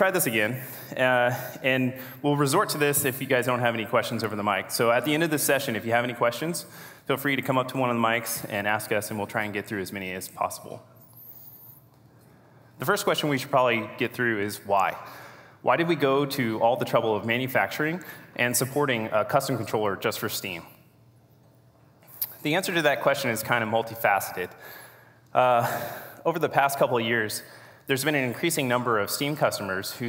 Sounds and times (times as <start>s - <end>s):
Speech: 0.0s - 10.9s, 12.8s - 20.7s, 22.3s - 24.6s, 25.3s - 30.0s.